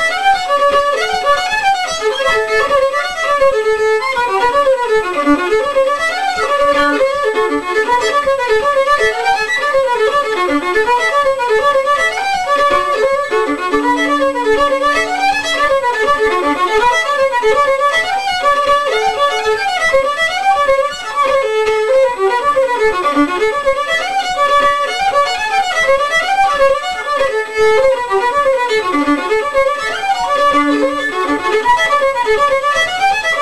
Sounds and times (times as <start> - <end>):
Violin, fiddle: 0.0 - 33.4.